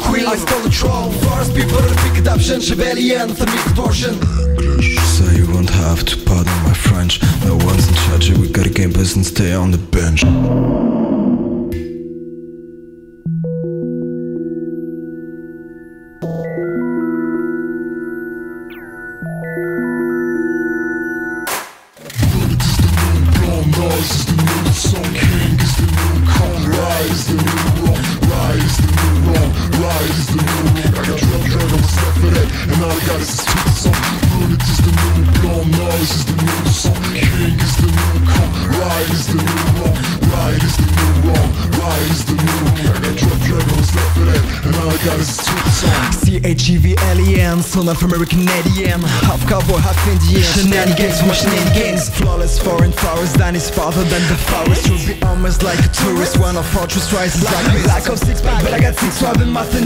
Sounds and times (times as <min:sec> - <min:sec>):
Music: 0:00.0 - 0:59.8.